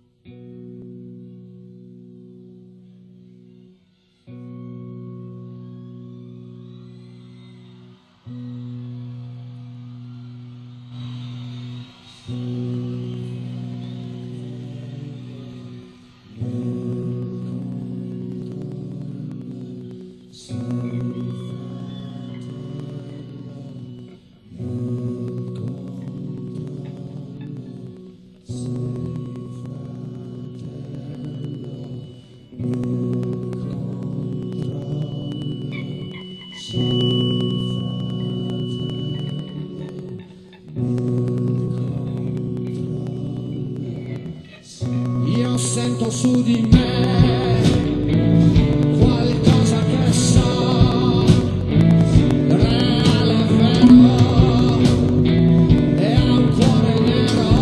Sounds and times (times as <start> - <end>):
Rock and roll: 0.5 - 57.6.